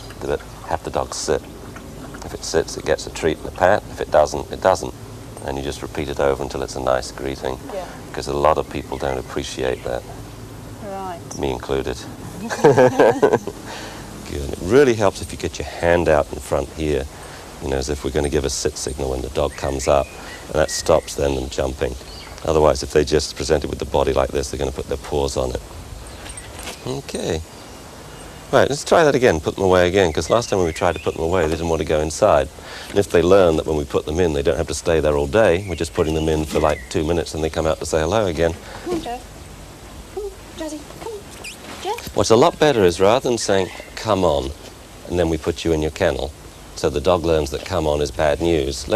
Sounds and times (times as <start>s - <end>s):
Speech: 0.0s - 1.4s, 2.2s - 10.1s, 10.8s - 13.6s, 14.2s - 25.6s, 26.8s - 27.4s, 28.5s - 39.2s, 40.2s - 41.2s, 41.8s - 48.9s.